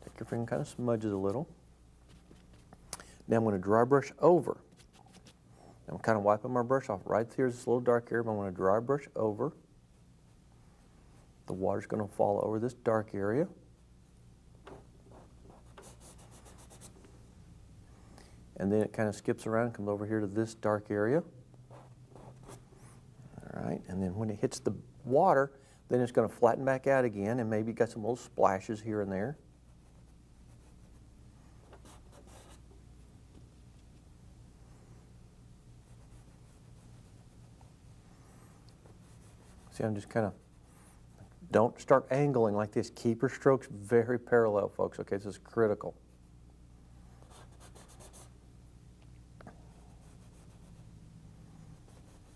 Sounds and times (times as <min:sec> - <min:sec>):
Speech: 0:00.0 - 0:01.6, 0:03.3 - 0:04.7, 0:05.9 - 0:09.6, 0:11.5 - 0:13.6, 0:18.6 - 0:21.4, 0:23.3 - 0:29.4, 0:39.7 - 0:40.4, 0:41.4 - 0:46.0.